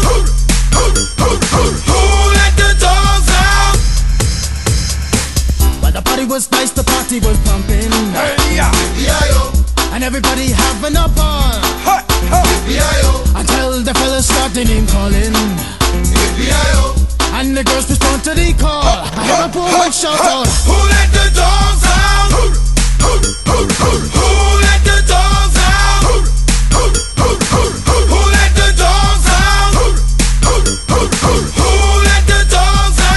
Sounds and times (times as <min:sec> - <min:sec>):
Reggae: 0:00.0 - 0:33.1.